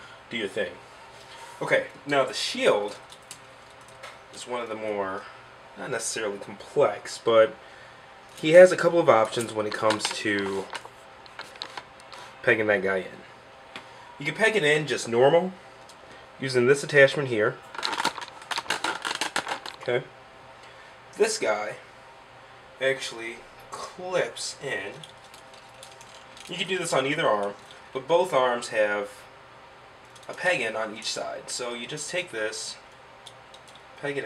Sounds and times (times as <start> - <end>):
Speech: 0.3 - 0.8, 1.6 - 3.0, 4.4 - 7.6, 8.4 - 10.7, 12.4 - 13.3, 14.2 - 15.6, 16.4 - 17.6, 19.8 - 20.1, 21.2 - 21.9, 22.8 - 25.0, 26.5 - 29.3, 30.3 - 32.8, 34.0 - 34.2.